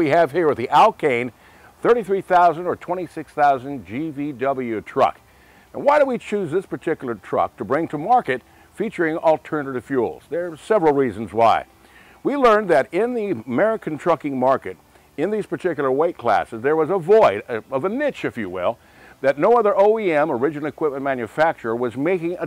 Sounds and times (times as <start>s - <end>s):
Speech: 0.0s - 22.4s.